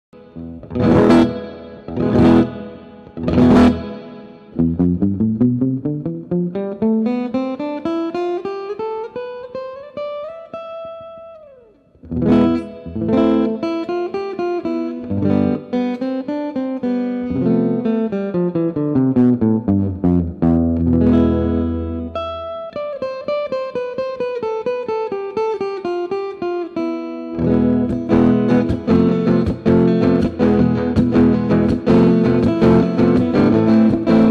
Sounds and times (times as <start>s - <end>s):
Guitar: 0.0s - 34.3s
Flamenco: 0.2s - 5.8s, 27.3s - 34.3s.